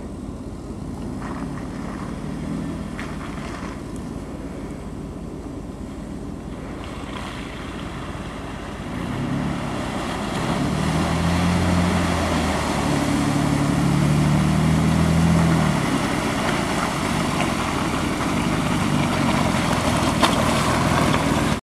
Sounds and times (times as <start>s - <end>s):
Stream: 0.0s - 21.6s.